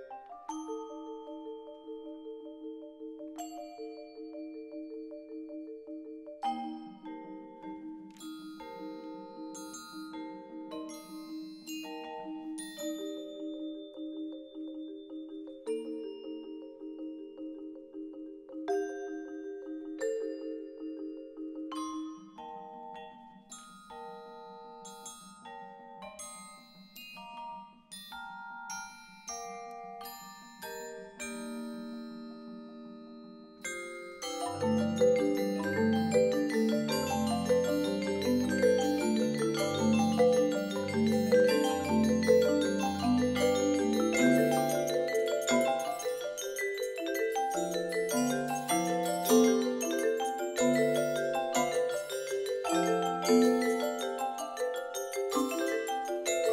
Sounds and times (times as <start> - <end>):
Marimba, xylophone: 0.0 - 56.5.